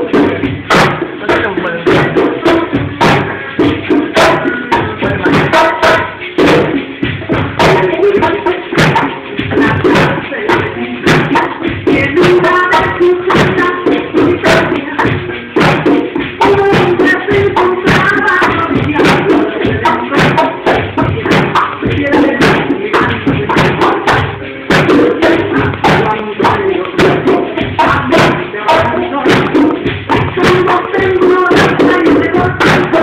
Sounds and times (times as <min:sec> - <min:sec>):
Percussion: 0:00.0 - 0:33.0.